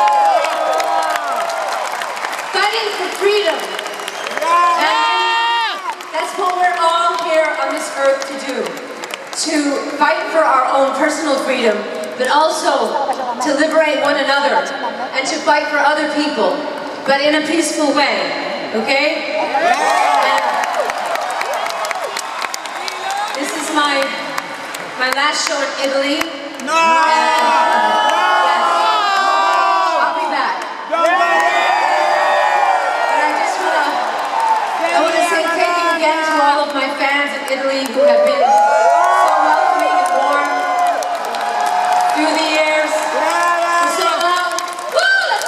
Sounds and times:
Female speech, woman speaking: 2.6s - 3.7s, 6.2s - 8.8s, 9.4s - 19.5s, 23.4s - 24.2s, 25.0s - 30.6s, 33.2s - 34.0s, 34.9s - 38.6s, 39.3s - 40.6s, 42.2s - 45.4s.

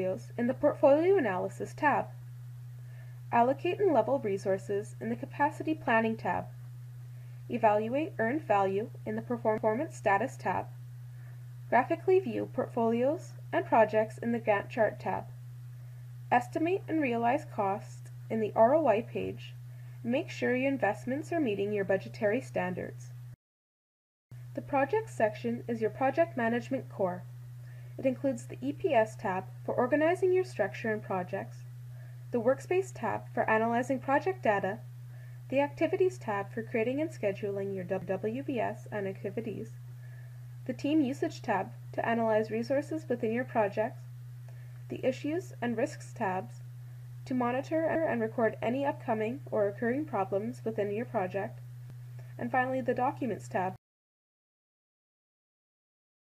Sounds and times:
Speech: 0.0s - 2.2s, 3.3s - 6.5s, 7.5s - 10.8s, 11.7s - 15.4s, 16.3s - 23.1s, 24.6s - 27.3s, 28.0s - 31.6s, 32.4s - 34.9s, 35.5s - 39.8s, 40.7s - 44.0s, 44.9s - 46.6s, 47.3s - 51.6s, 52.4s - 53.8s.

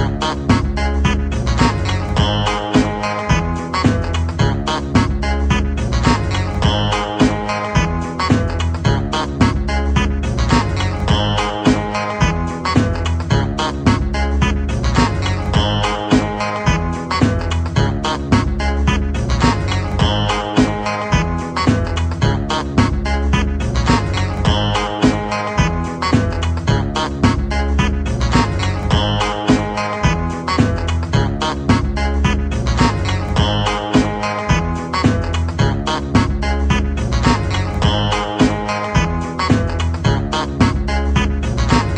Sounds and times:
Funk: 0.0s - 41.9s
Trance music: 0.0s - 41.9s.

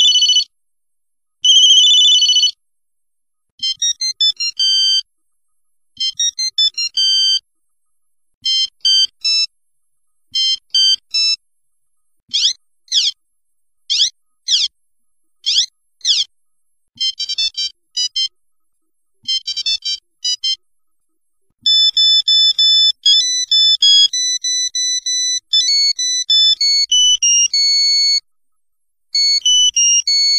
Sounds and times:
Ringtone: 0.0s - 0.5s, 1.4s - 2.6s, 3.6s - 5.1s, 6.0s - 7.5s, 8.4s - 9.6s, 10.3s - 11.4s, 12.3s - 13.2s, 13.9s - 14.7s, 15.4s - 16.3s, 17.0s - 18.4s, 19.2s - 20.6s, 21.6s - 28.3s, 29.2s - 30.3s.

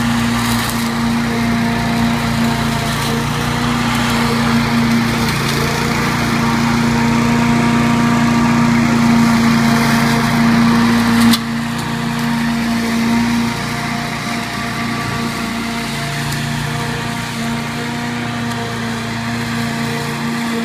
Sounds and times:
Lawn mower: 0.0s - 20.6s.

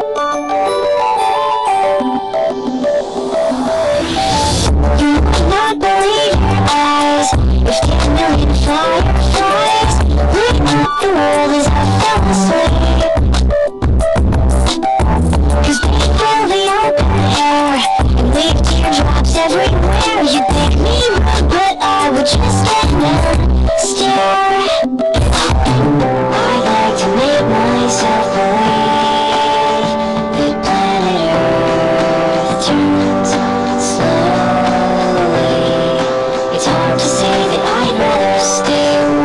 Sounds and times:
Music: 0.0s - 39.2s.

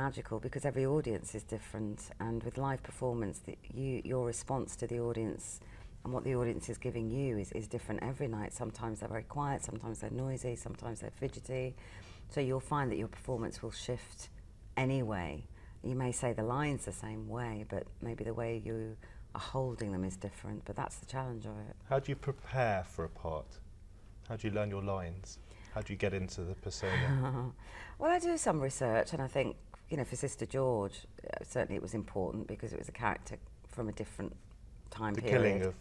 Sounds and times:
Speech: 12.4s - 23.6s, 24.3s - 26.9s, 35.0s - 35.8s.

